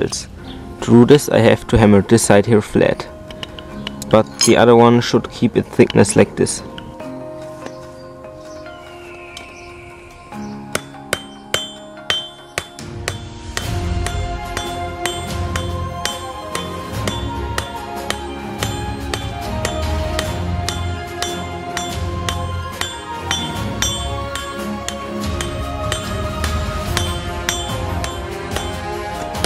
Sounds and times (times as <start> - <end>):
Speech: 0.0 - 3.1, 4.1 - 6.7
Music: 0.0 - 29.4.